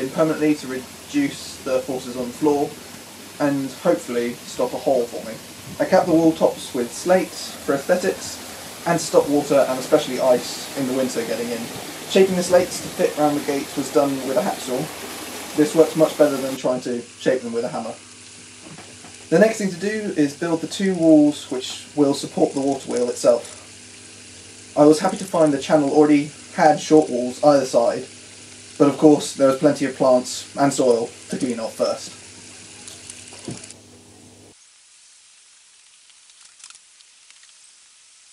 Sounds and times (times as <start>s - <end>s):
Speech: 0.0s - 2.8s, 3.4s - 14.9s, 15.6s - 18.0s, 19.3s - 23.6s, 24.8s - 28.1s, 28.8s - 32.2s.